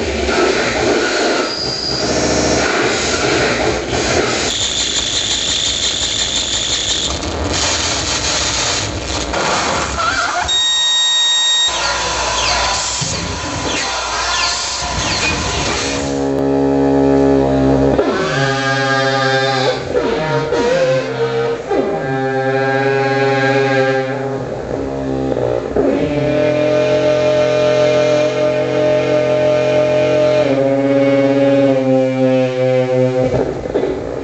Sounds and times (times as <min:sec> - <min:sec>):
Cacophony: 0:00.0 - 0:34.2.